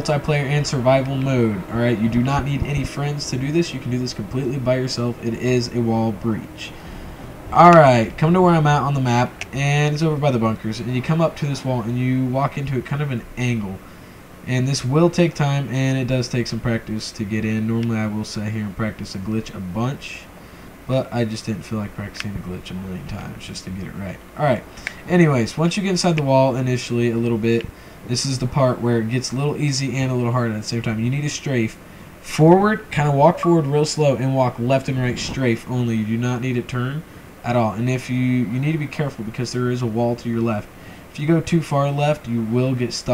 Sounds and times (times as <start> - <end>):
Speech: 0.0 - 6.8, 7.6 - 13.8, 14.5 - 20.3, 20.9 - 43.1.